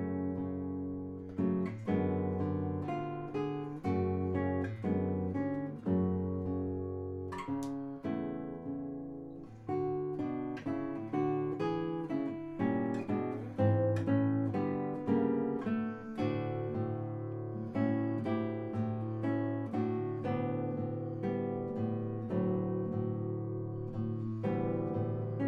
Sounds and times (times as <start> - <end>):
Acoustic guitar: 0.0 - 25.4.